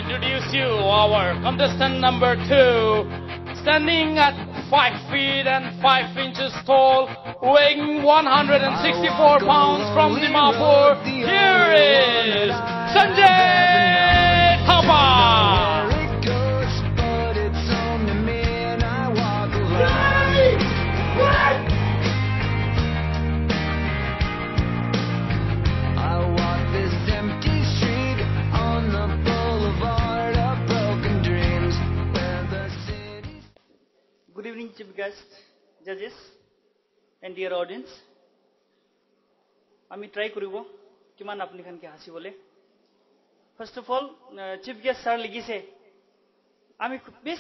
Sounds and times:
Music: 0:00.0 - 0:33.6.

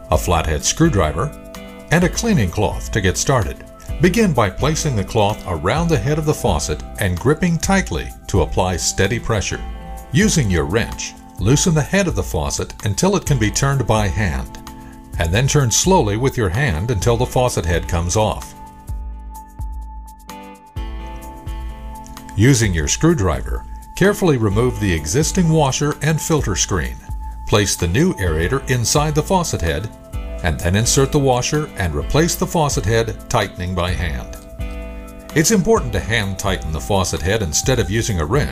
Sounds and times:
Music: 0:00.0 - 0:38.5
Narration, monologue: 0:00.0 - 0:38.5.

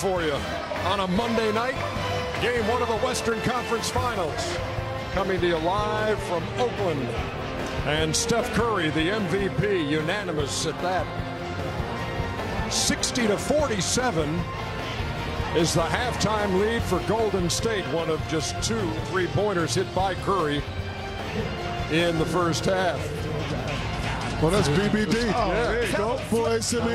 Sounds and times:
Speech: 0:00.0 - 0:01.8, 0:02.4 - 0:04.6, 0:07.9 - 0:11.0, 0:12.7 - 0:14.4, 0:15.6 - 0:20.6, 0:21.9 - 0:23.0, 0:24.4 - 0:26.9
Music: 0:00.0 - 0:26.9.

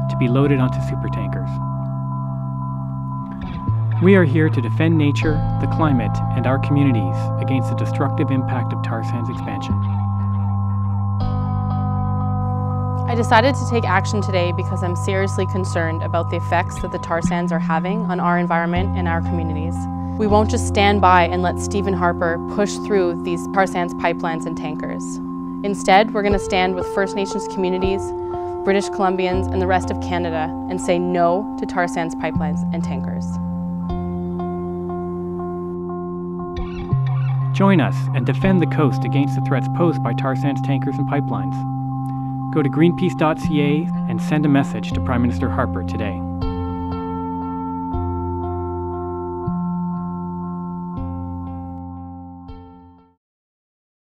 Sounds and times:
Music: 0:00.0 - 0:53.2
Speech: 0:00.1 - 0:01.6, 0:04.0 - 0:09.8, 0:13.1 - 0:28.1, 0:28.7 - 0:33.4, 0:37.6 - 0:41.6, 0:42.5 - 0:46.2.

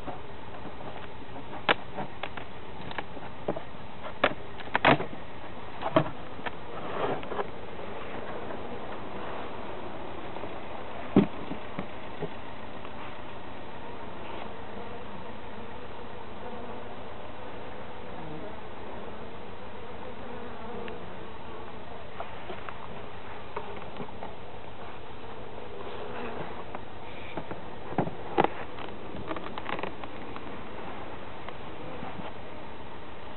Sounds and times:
Bee, wasp, etc.: 0:00.0 - 0:33.3.

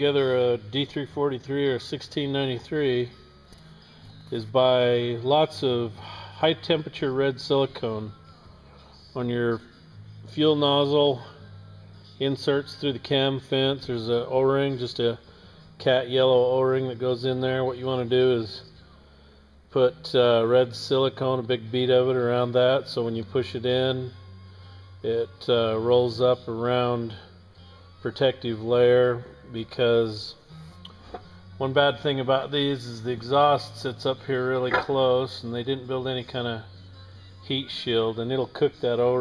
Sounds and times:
Speech: 0:00.0 - 0:03.1, 0:04.3 - 0:08.1, 0:09.2 - 0:09.6, 0:10.3 - 0:11.4, 0:12.2 - 0:15.2, 0:15.8 - 0:18.7, 0:19.8 - 0:24.1, 0:25.0 - 0:27.3, 0:28.0 - 0:30.4, 0:31.6 - 0:36.7, 0:37.4 - 0:39.2
Music: 0:00.0 - 0:39.2.

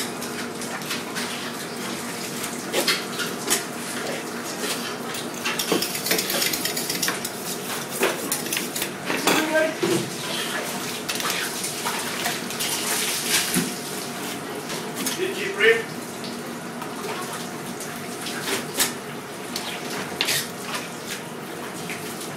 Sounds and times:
Water: 0:00.0 - 0:22.3.

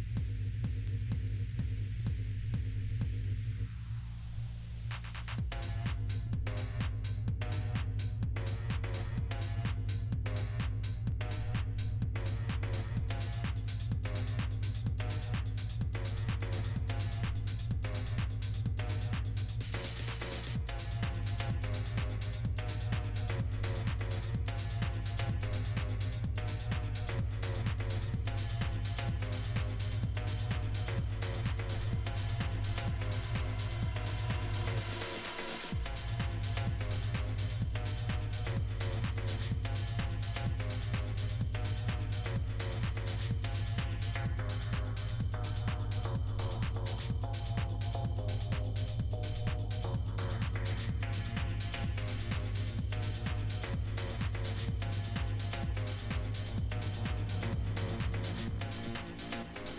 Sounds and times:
Background music: 0:00.0 - 0:59.7
Exciting music: 0:05.2 - 0:59.7.

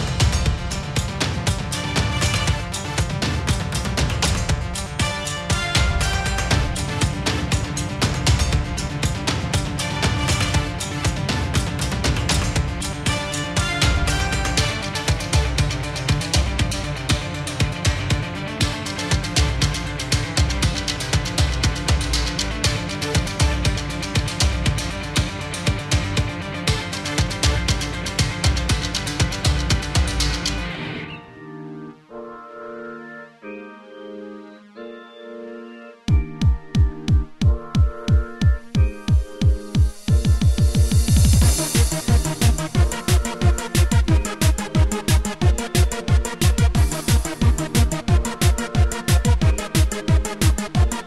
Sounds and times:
Music: 0:00.0 - 0:51.0.

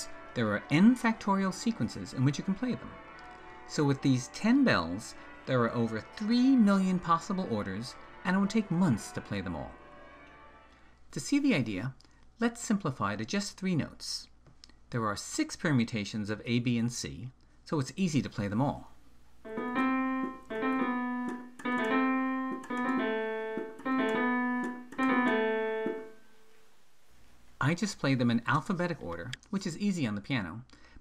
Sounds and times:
Speech: 0:00.0 - 0:03.0, 0:03.7 - 0:09.8, 0:11.1 - 0:19.0, 0:27.6 - 0:30.7
Music: 0:00.0 - 0:11.6, 0:19.5 - 0:26.5.

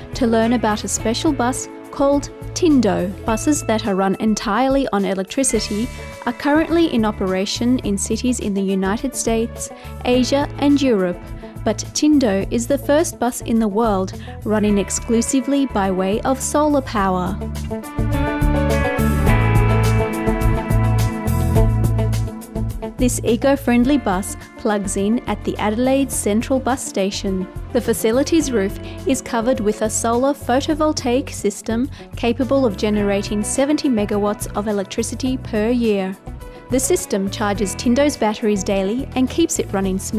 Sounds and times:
Music: 0:00.0 - 0:40.1
Speech: 0:00.2 - 0:17.4, 0:23.0 - 0:40.1.

